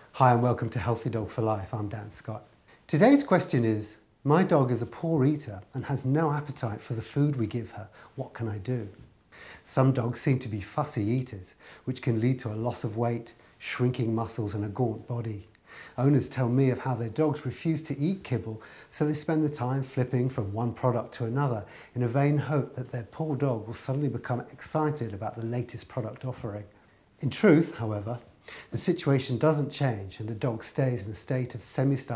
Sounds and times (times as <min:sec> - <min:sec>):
Speech: 0:00.1 - 0:09.0, 0:09.6 - 0:32.1.